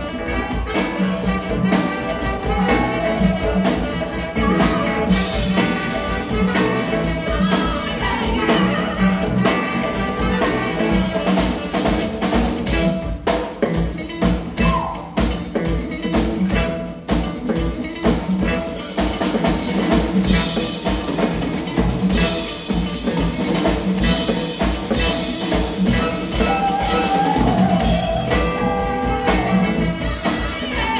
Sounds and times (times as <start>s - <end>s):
Drum kit: 0.0s - 30.9s.